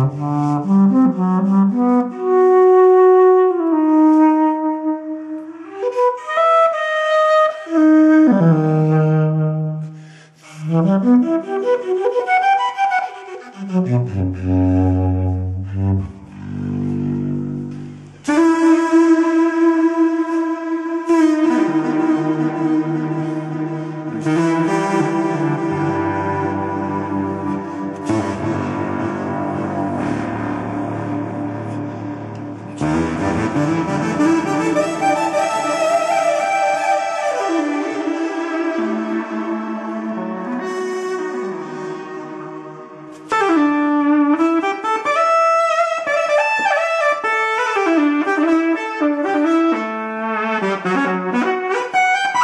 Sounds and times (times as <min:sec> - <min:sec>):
Flute: 0:00.0 - 0:52.4.